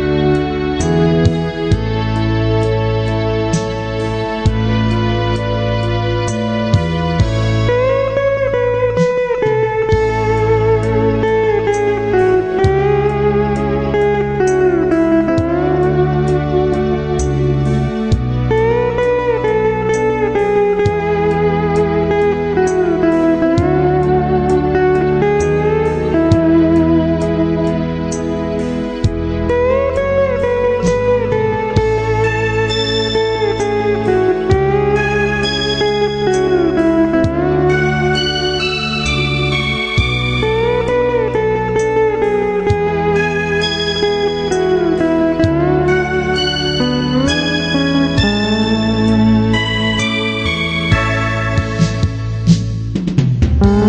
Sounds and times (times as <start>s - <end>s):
Guitar: 0.0s - 53.8s.